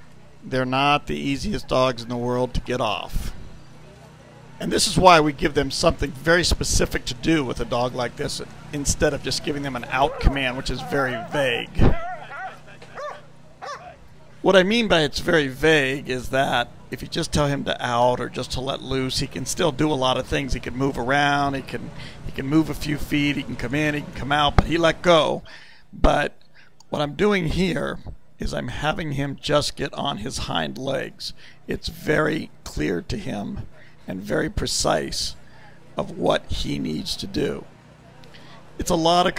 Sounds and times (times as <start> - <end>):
Speech: 0.4 - 3.4, 4.6 - 11.9, 14.4 - 25.4, 26.0 - 35.4, 36.0 - 37.7, 38.8 - 39.3
Bow-wow: 10.0 - 14.0.